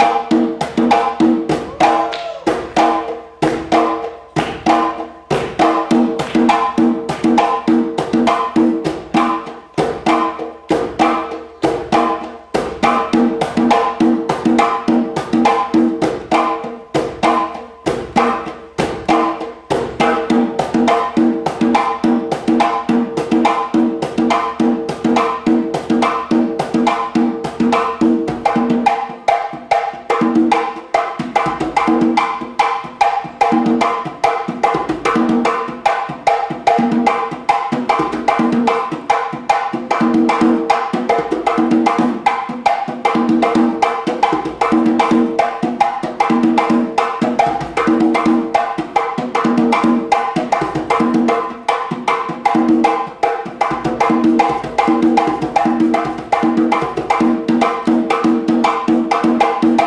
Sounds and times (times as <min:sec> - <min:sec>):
Drum: 0:00.0 - 0:59.8.